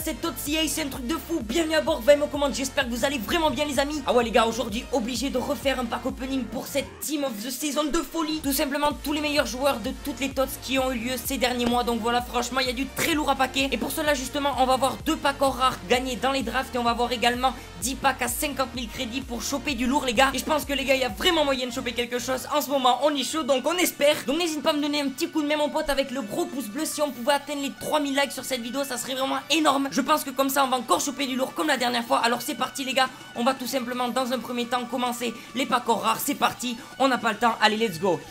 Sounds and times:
Music: 0:00.0 - 0:38.3
Speech: 0:00.0 - 0:38.3.

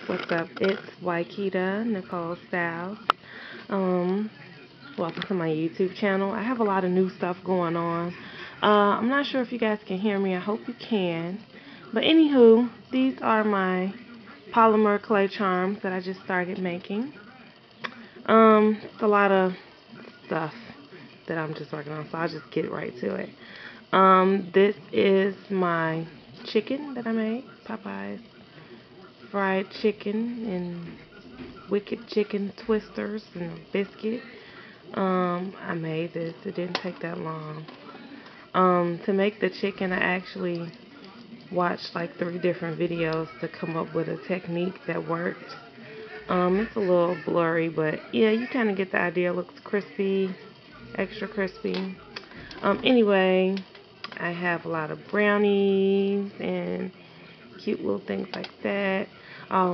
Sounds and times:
Speech: 0:00.0 - 0:59.7.

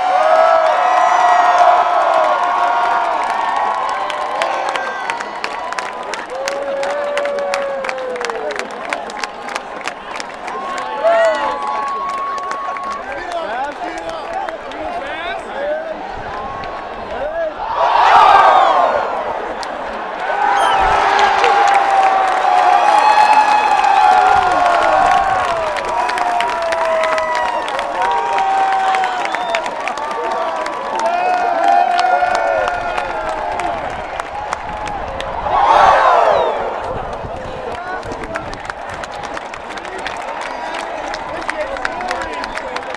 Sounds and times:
Cheering: 0:00.0 - 0:42.9
Crowd: 0:00.0 - 0:42.9.

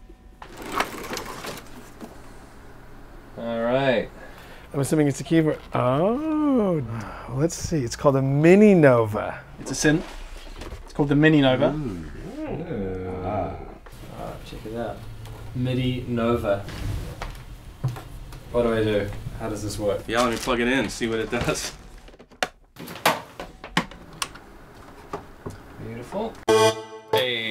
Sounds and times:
Speech: 0:04.8 - 0:10.1.

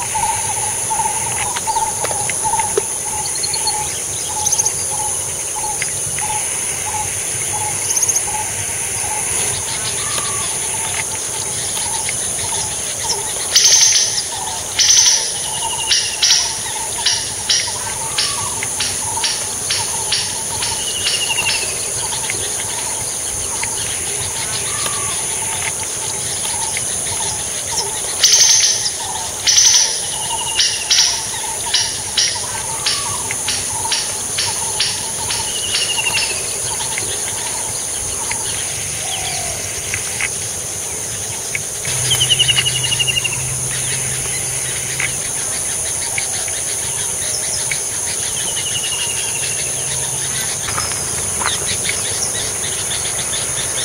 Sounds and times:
Outside, rural or natural: 0:00.0 - 0:53.8.

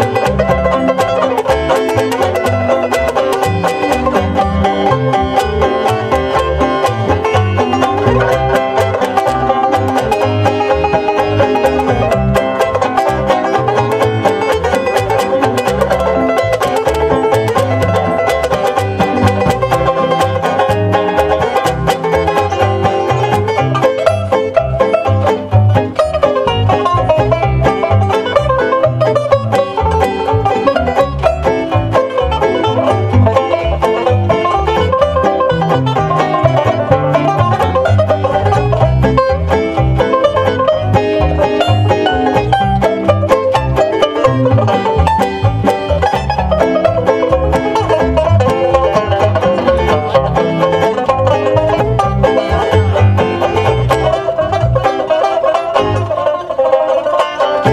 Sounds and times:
Banjo: 0:00.0 - 0:57.7.

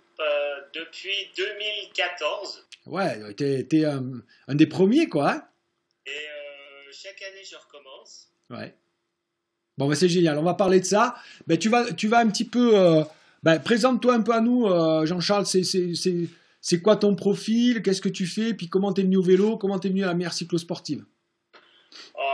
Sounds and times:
Speech: 0:00.2 - 0:05.5, 0:06.1 - 0:08.8, 0:09.8 - 0:21.1, 0:22.1 - 0:22.3.

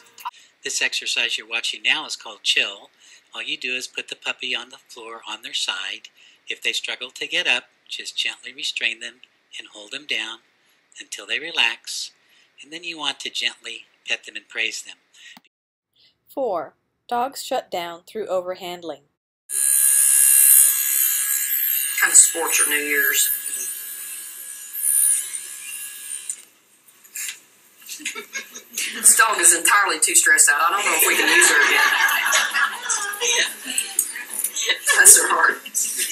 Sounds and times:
Inside, small room: 0:00.0 - 0:36.1
Speech: 0:00.7 - 0:10.4, 0:11.0 - 0:15.0, 0:16.3 - 0:19.1, 0:22.0 - 0:23.4, 0:34.7 - 0:36.1.

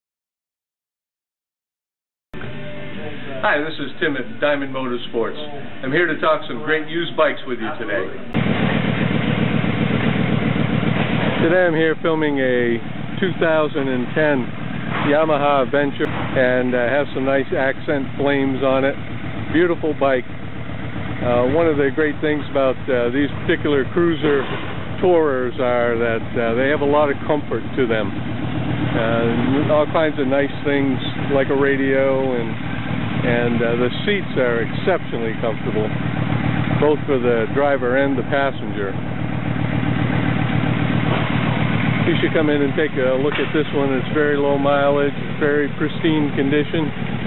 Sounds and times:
Speech: 0:03.0 - 0:08.3, 0:11.4 - 0:20.3, 0:21.2 - 0:28.2, 0:29.0 - 0:32.6, 0:33.2 - 0:35.9, 0:36.8 - 0:39.0, 0:42.0 - 0:46.9.

